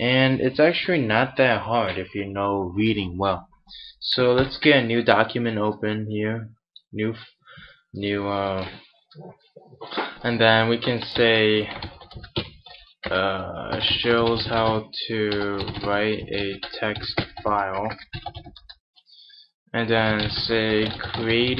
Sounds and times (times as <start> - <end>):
Speech: 0.0 - 3.4, 4.0 - 7.4, 8.0 - 11.8, 13.1 - 18.0, 19.8 - 21.5.